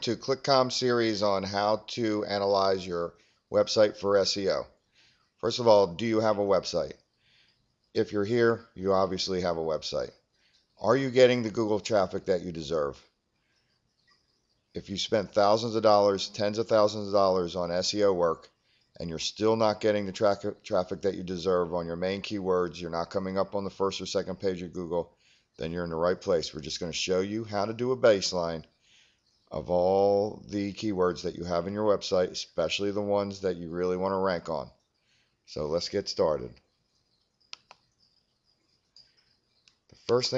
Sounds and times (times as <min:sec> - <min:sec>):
Speech: 0:00.0 - 0:04.7, 0:05.4 - 0:07.0, 0:08.0 - 0:10.2, 0:10.8 - 0:13.0, 0:14.8 - 0:28.7, 0:29.5 - 0:34.8, 0:35.5 - 0:36.6, 0:40.1 - 0:40.3.